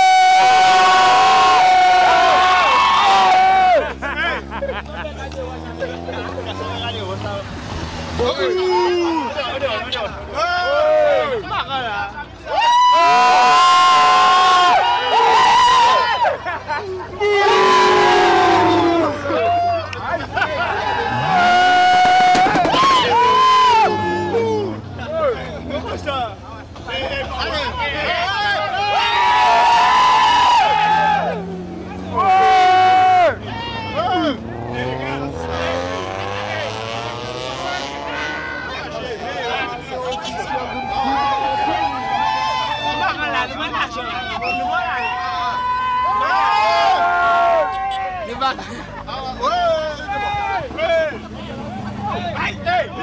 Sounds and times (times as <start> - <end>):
Speech: 4.6 - 7.5, 8.2 - 12.6, 24.2 - 29.0, 37.5 - 45.7, 47.8 - 53.0.